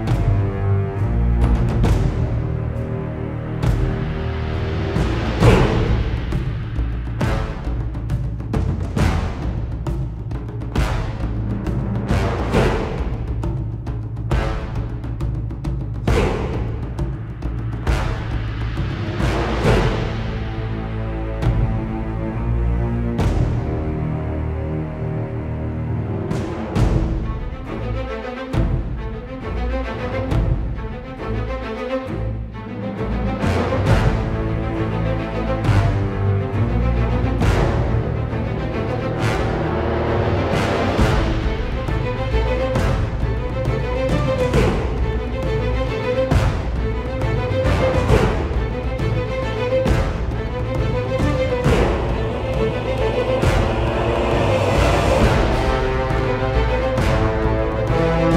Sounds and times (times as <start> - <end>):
Music: 0.0 - 58.3.